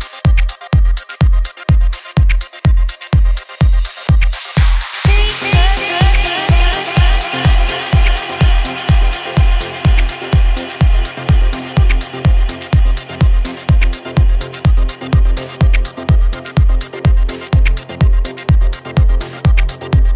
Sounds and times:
Music: 0.0 - 20.1.

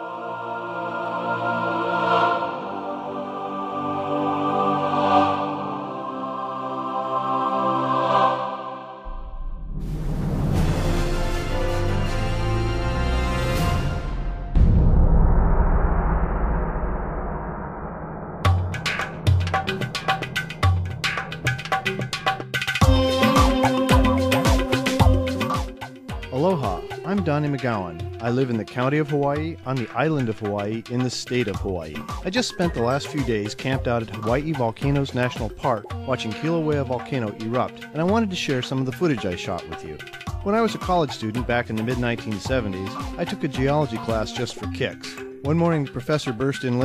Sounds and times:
Music: 0.0 - 15.3, 18.4 - 46.8
Speech: 26.3 - 46.8.

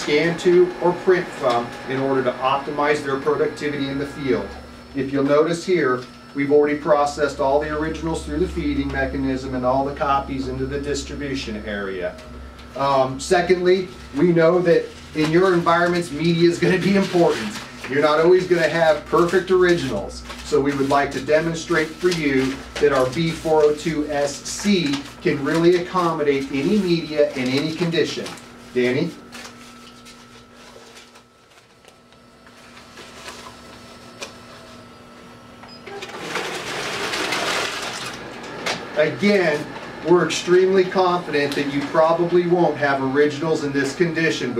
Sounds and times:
Speech: 0.0 - 12.2, 12.8 - 29.2, 39.0 - 44.5
Printer: 0.0 - 44.5.

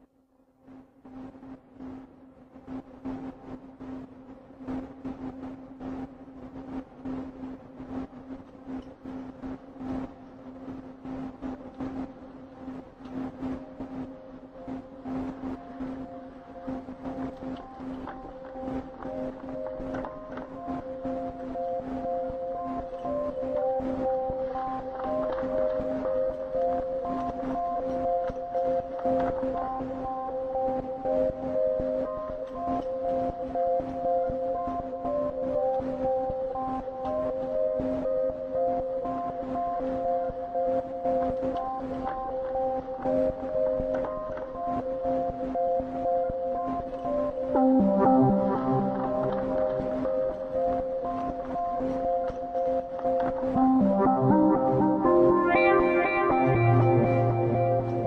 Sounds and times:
Music: 0.0 - 58.0.

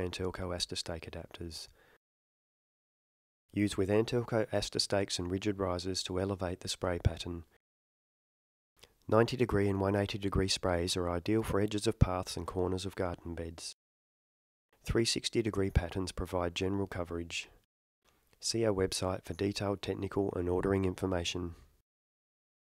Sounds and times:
Speech: 0.0 - 1.8, 3.6 - 7.6, 9.1 - 13.8, 14.8 - 17.6, 18.4 - 21.7.

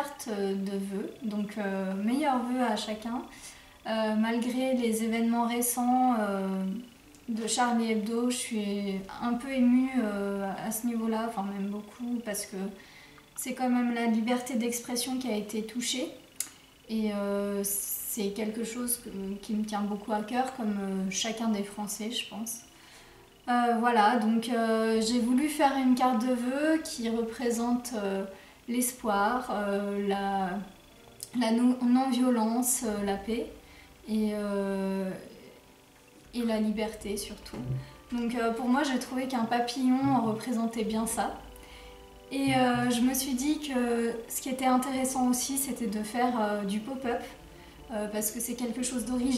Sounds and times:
Speech: 0.0 - 3.3, 3.9 - 12.8, 13.4 - 16.2, 16.9 - 22.7, 23.5 - 35.5, 36.3 - 41.4, 42.3 - 49.3.

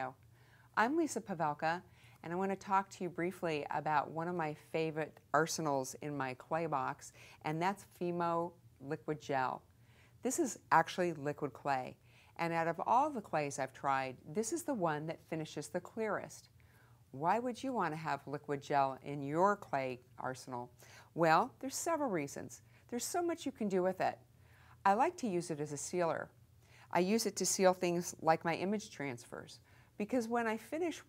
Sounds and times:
Speech: 0.0 - 0.2, 0.8 - 9.6, 10.2 - 16.5, 17.2 - 24.2, 24.8 - 31.0.

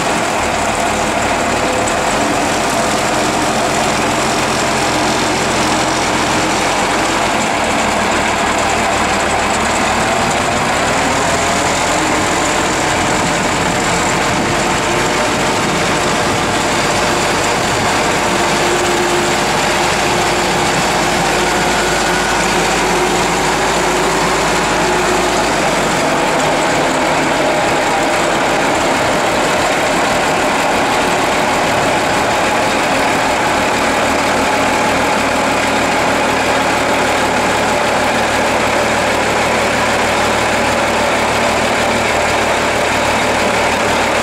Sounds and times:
Outside, rural or natural: 0.0 - 44.2
Vehicle: 0.0 - 44.2.

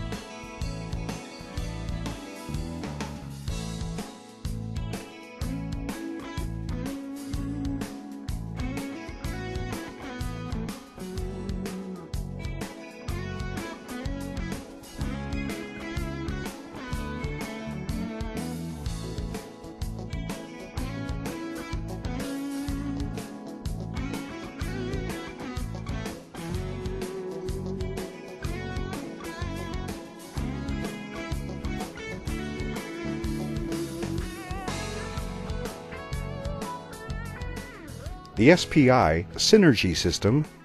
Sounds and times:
Music: 0.0 - 40.6.

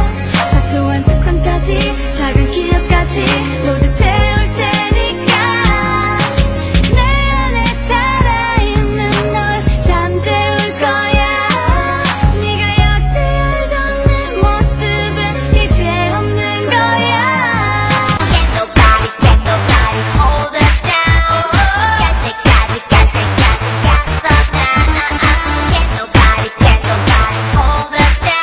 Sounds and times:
Female singing: 0.0 - 6.3, 7.0 - 28.4
Music: 0.0 - 28.4.

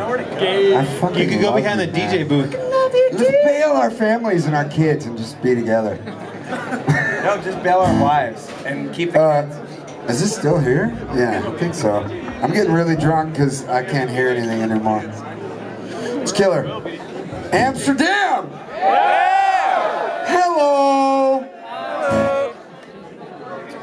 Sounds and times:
Speech: 20.3 - 22.5.

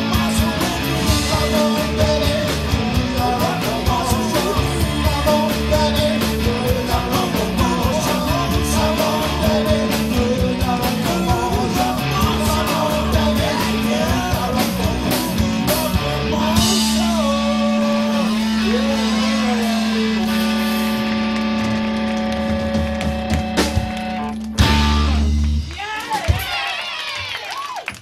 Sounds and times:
Singing: 0.0 - 20.4
Music: 0.0 - 26.5.

